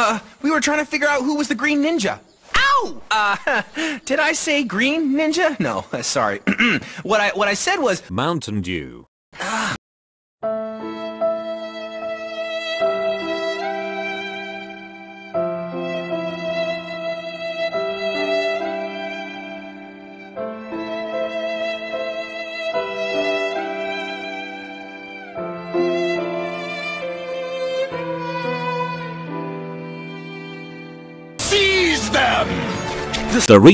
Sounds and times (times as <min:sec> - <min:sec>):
Speech: 0:00.0 - 0:03.3, 0:04.1 - 0:06.5, 0:07.1 - 0:09.1, 0:31.4 - 0:32.6, 0:33.3 - 0:33.7
Music: 0:10.4 - 0:33.7.